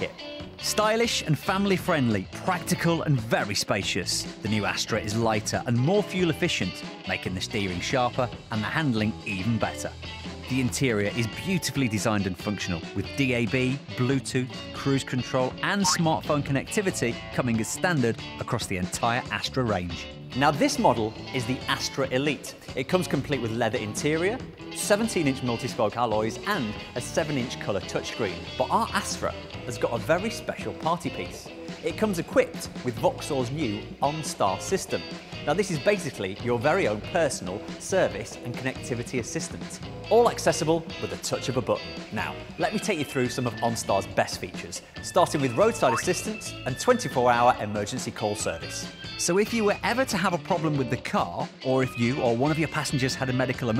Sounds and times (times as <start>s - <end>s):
Music: 0.0s - 53.7s
Speech: 0.0s - 53.7s.